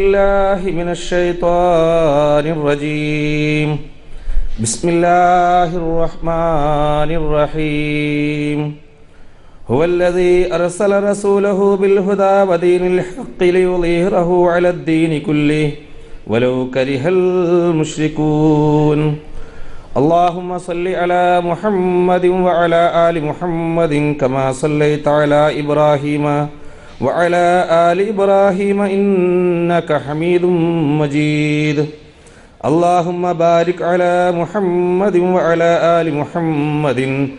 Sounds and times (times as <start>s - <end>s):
Narration, monologue: 0.0s - 37.3s.